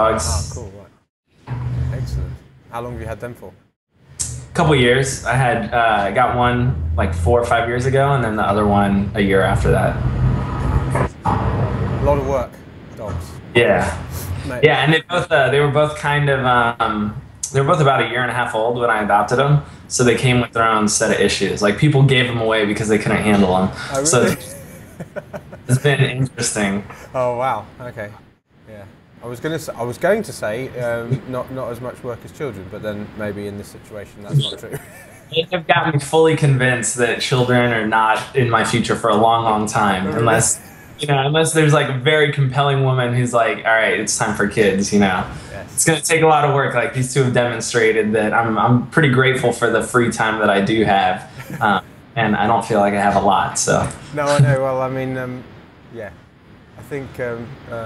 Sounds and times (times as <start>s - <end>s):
Speech: 0.0s - 0.9s, 1.9s - 3.6s, 4.2s - 10.0s, 12.0s - 56.1s, 56.8s - 57.8s.